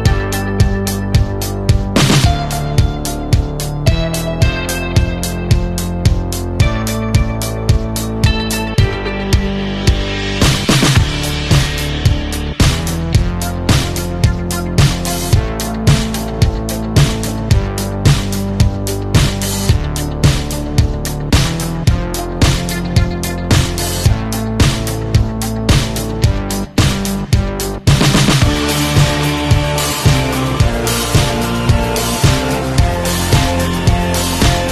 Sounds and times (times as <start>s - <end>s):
Music: 0.0s - 34.7s.